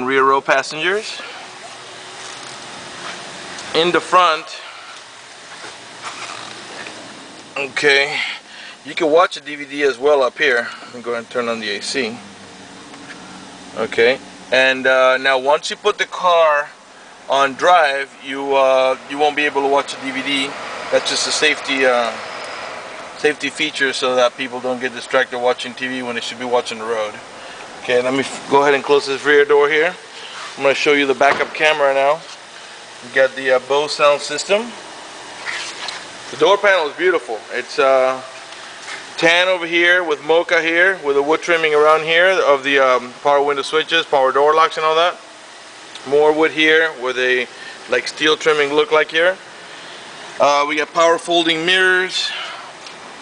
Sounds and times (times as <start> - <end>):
Speech: 0.0 - 1.4, 3.7 - 4.7, 7.6 - 12.2, 13.8 - 22.2, 23.2 - 27.2, 27.8 - 30.0, 30.6 - 32.3, 33.0 - 34.8, 36.3 - 38.3, 39.2 - 45.2, 46.0 - 49.4, 50.4 - 52.6.